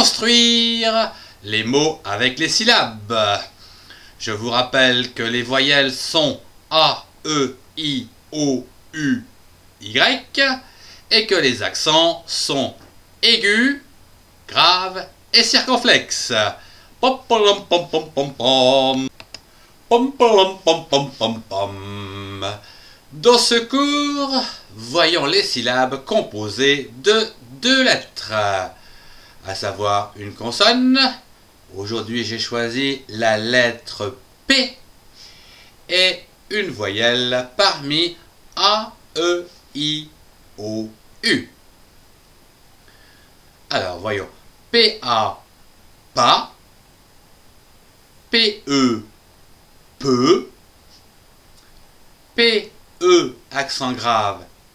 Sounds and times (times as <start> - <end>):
Speech: 0.0 - 3.6, 4.2 - 13.9, 14.5 - 19.2, 19.9 - 28.8, 29.4 - 34.8, 35.9 - 41.6, 43.7 - 45.5, 46.2 - 46.6, 48.3 - 49.1, 50.0 - 50.6, 52.4 - 54.5.